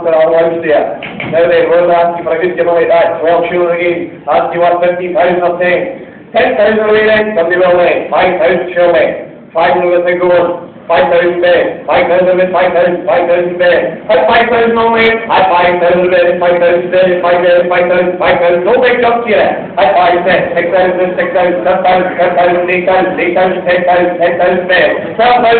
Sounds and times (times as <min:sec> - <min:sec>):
Speech: 0:00.0 - 0:25.5.